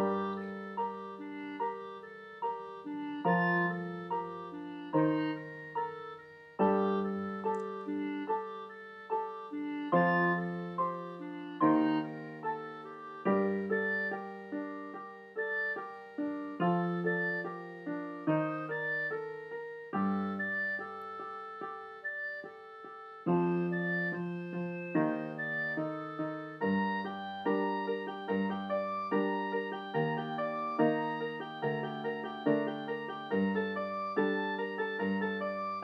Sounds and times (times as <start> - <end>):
Piano: 0.0 - 35.8.